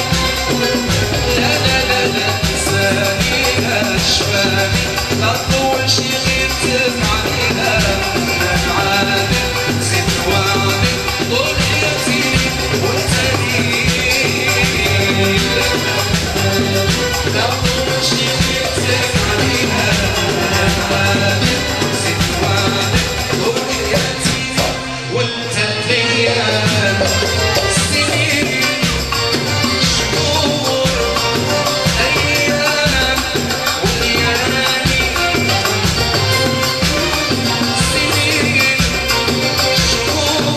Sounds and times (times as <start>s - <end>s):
Music: 0.0s - 40.5s.